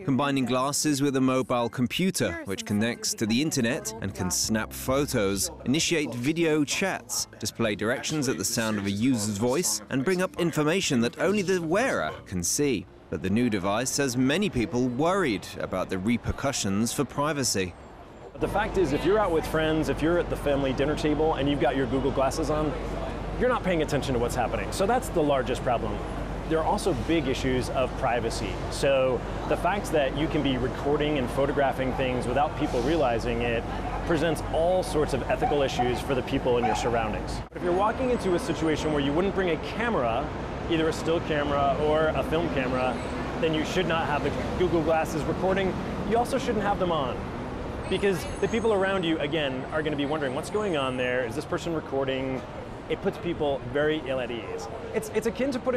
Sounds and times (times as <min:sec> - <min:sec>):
Speech: 0:00.0 - 0:17.7, 0:18.4 - 0:47.2, 0:47.9 - 0:55.7.